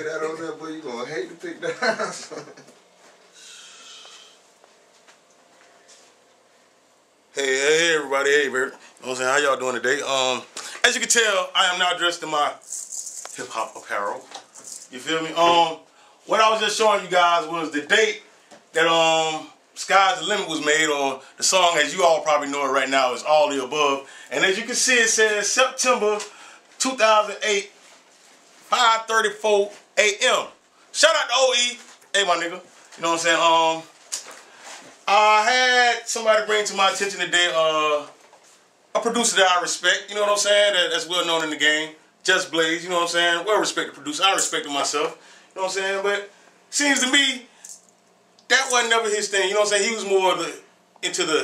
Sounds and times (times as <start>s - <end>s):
Speech: 0.0s - 2.4s, 7.3s - 12.6s, 13.4s - 27.7s, 28.7s - 33.9s, 35.0s - 38.2s, 39.0s - 47.5s, 48.5s - 51.4s.